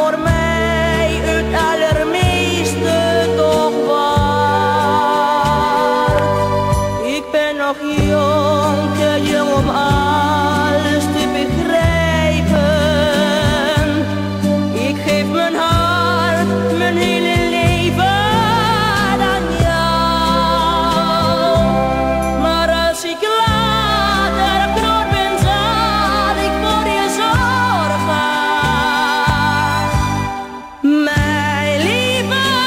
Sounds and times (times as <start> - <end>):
Singing: 0.0 - 14.1, 14.8 - 32.6
Soul music: 0.0 - 32.6.